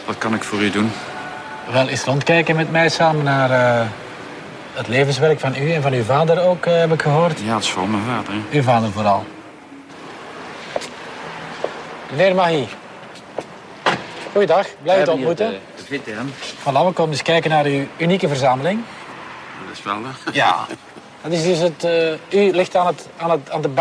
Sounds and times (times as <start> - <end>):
Door: 13.8 - 14.4.